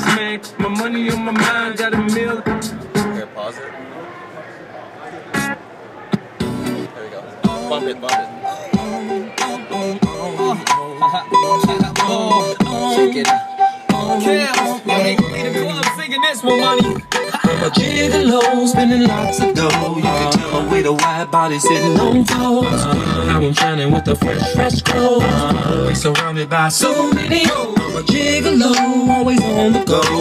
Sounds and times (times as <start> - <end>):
Music: 0.0 - 3.2, 5.4 - 5.6, 6.4 - 30.2.